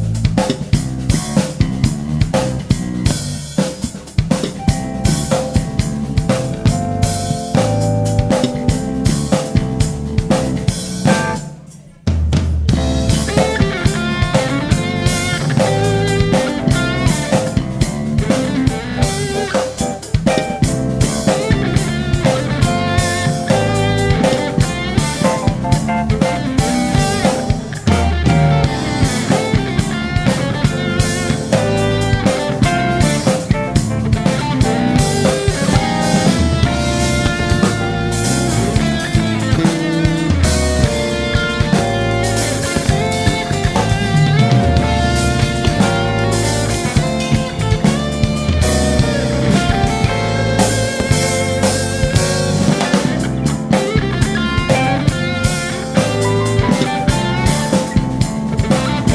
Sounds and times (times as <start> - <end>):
Steel guitar, slide guitar: 12.9 - 59.1.